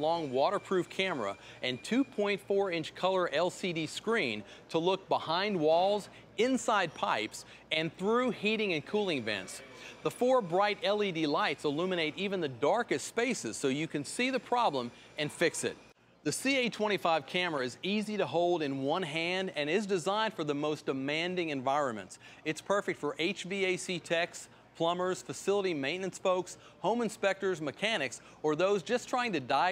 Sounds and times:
Speech: 0.0 - 29.7.

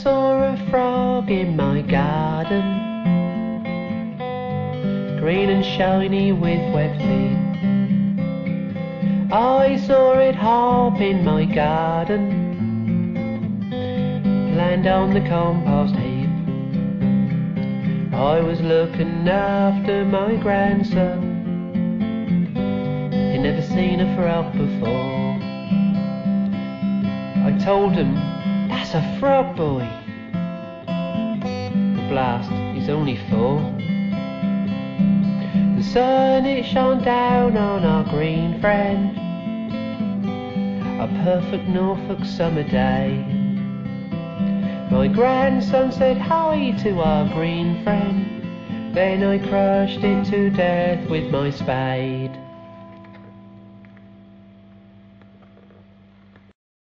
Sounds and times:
Music: 0.0 - 56.5.

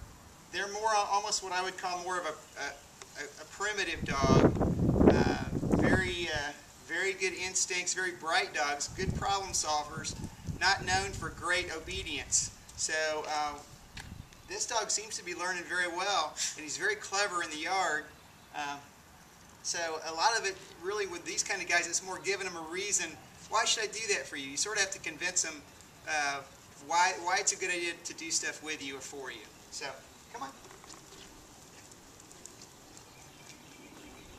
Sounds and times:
Speech: 0.6 - 4.5, 5.1 - 13.7, 14.5 - 18.9, 19.6 - 30.6.

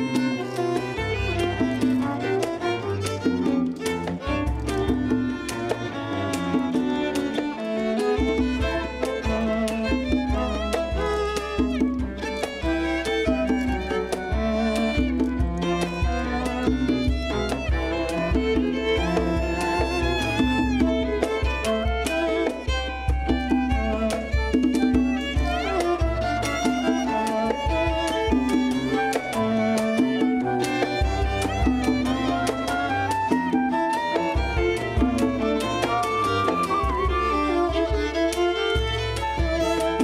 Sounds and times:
Violin, fiddle: 0.0 - 40.0.

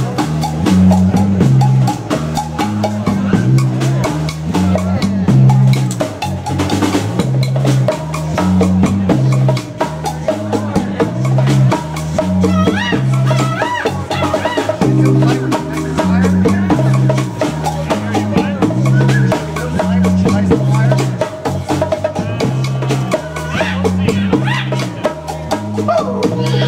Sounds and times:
Music: 0.0 - 26.6
Speech: 3.0 - 6.0, 8.2 - 26.6.

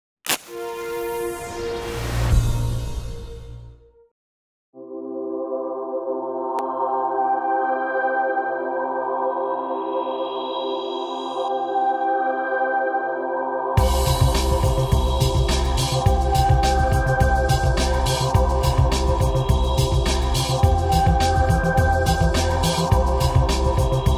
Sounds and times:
Ambient music: 0.4 - 4.1, 4.8 - 24.1.

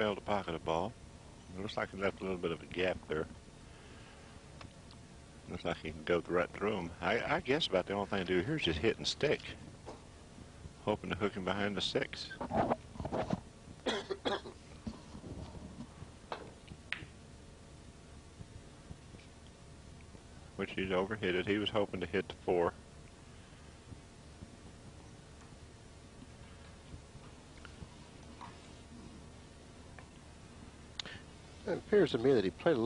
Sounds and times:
Speech: 0.0 - 3.4, 5.5 - 9.6, 10.8 - 12.4, 20.6 - 22.8, 31.6 - 32.8.

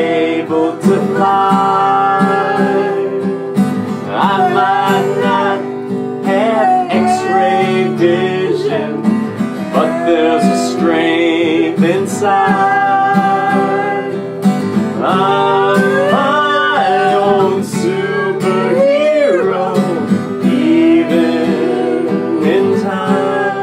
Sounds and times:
Music: 0.0 - 23.6.

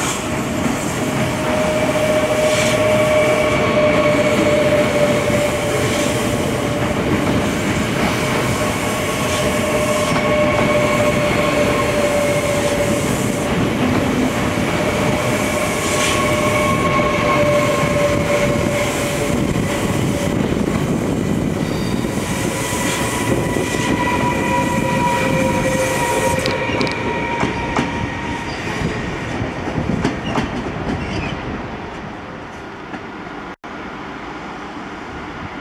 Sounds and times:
Railroad car, train wagon: 0.0 - 35.6
Subway, metro, underground: 0.0 - 35.6
Train: 0.0 - 35.6.

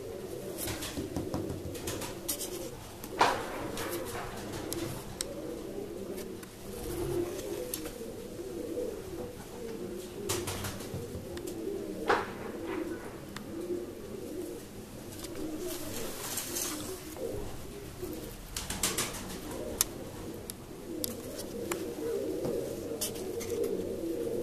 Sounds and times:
Pigeon, dove: 0.0 - 24.4.

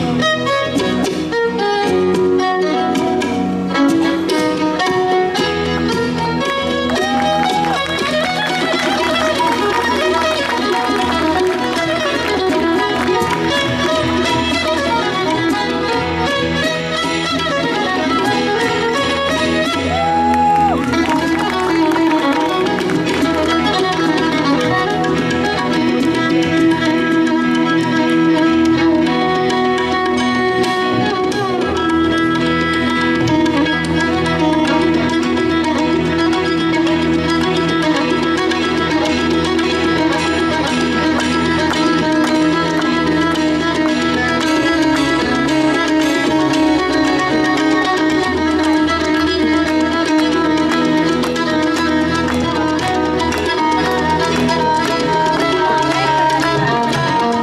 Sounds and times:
Crowd: 0.0 - 57.4
Percussion: 0.0 - 57.4
Traditional music: 0.0 - 57.4
Violin, fiddle: 0.0 - 57.4.

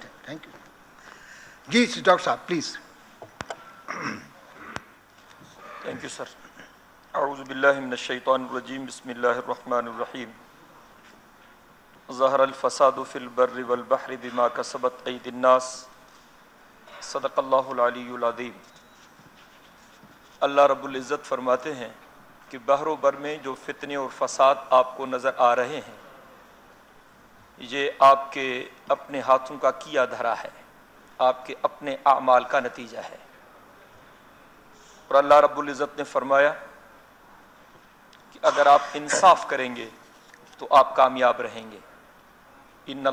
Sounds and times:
Male speech, man speaking: 0.0 - 0.6, 1.7 - 2.9, 5.8 - 6.4, 7.2 - 10.4, 12.1 - 15.9, 17.0 - 18.6, 20.4 - 26.0, 27.6 - 30.6, 31.2 - 33.3, 35.1 - 36.8, 38.4 - 40.0, 40.6 - 41.9, 42.9 - 43.1
Narration, monologue: 0.0 - 43.1.

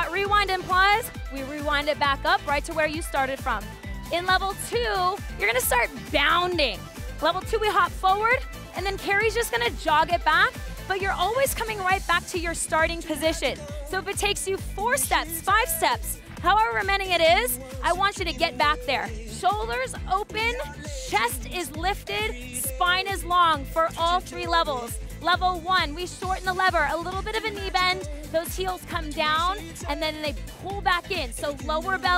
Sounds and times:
Music: 0.0 - 32.1
Speech: 0.0 - 32.1.

